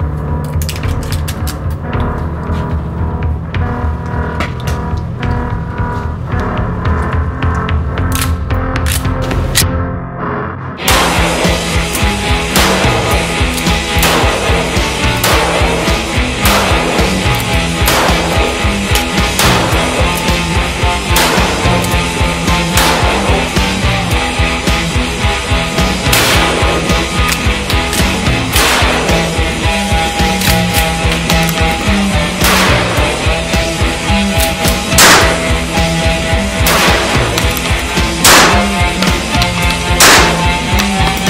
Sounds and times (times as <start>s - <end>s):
Music: 0.0s - 41.3s.